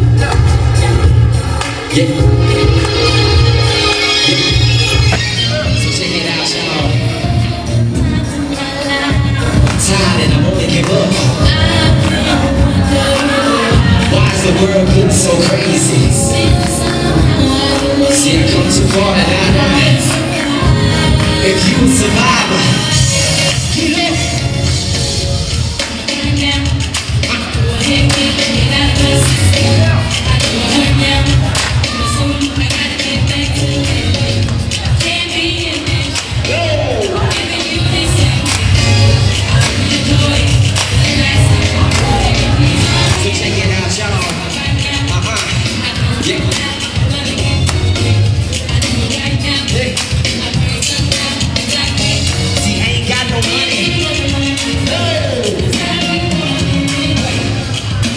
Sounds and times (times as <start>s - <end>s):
Music: 0.0s - 58.1s.